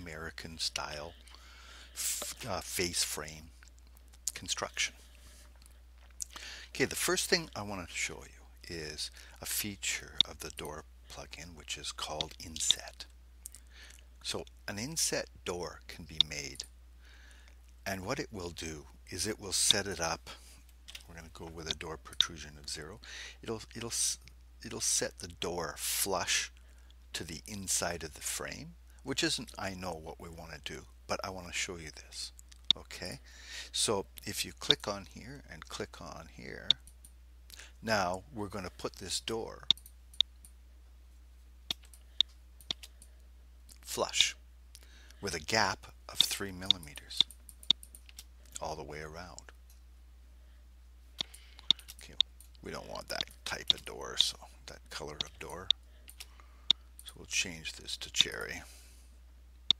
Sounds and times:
Speech: 0.0 - 1.2, 2.0 - 3.6, 4.3 - 5.0, 6.7 - 13.1, 14.2 - 16.7, 17.8 - 20.4, 21.0 - 36.8, 37.8 - 39.7, 43.8 - 44.4, 45.2 - 47.3, 48.6 - 49.5, 52.0 - 55.8, 57.0 - 58.8.

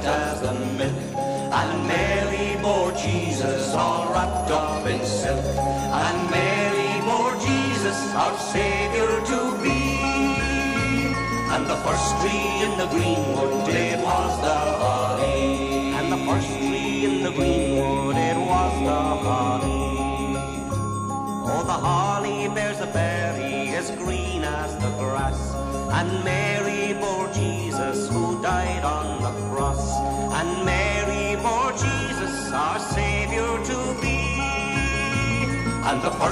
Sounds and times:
Christian music: 0.0 - 36.3
Christmas music: 0.0 - 36.3.

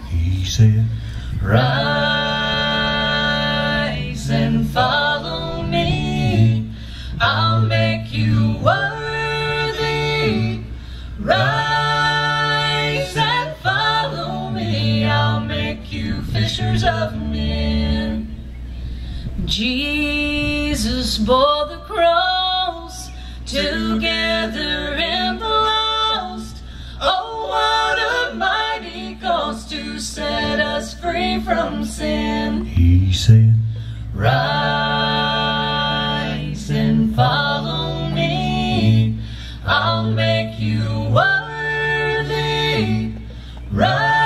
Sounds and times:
Singing: 0.0 - 18.8, 19.4 - 44.2.

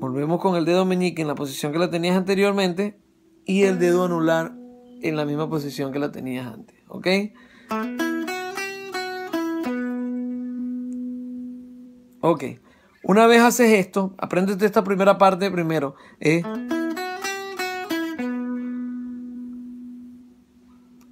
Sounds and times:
Speech: 0.0 - 7.4, 12.2 - 16.6
Electronic tuner: 2.7 - 6.8, 7.4 - 13.0, 16.4 - 21.1
Electric guitar: 7.5 - 12.2.

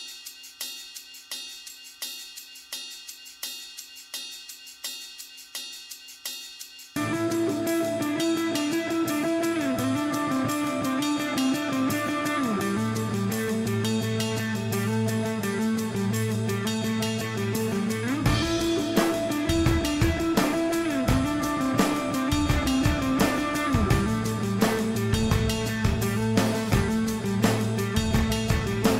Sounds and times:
Music: 0.0 - 28.9.

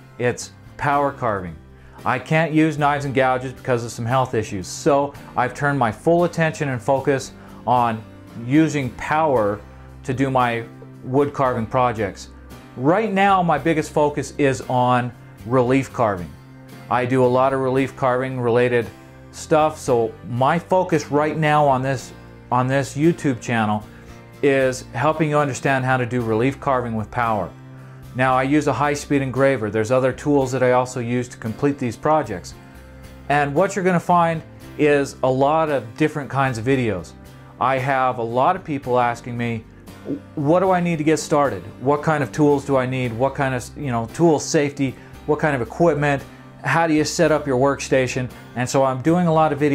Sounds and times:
Music: 0.0 - 49.7
Speech: 0.2 - 27.5, 28.2 - 32.6, 33.3 - 49.7.

